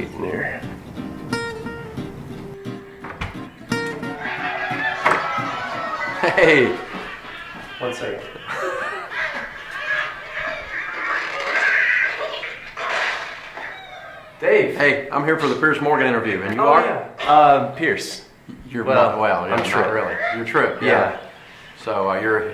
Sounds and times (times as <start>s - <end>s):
Music: 0.0s - 7.0s
Chuckle, chortle: 6.1s - 10.8s.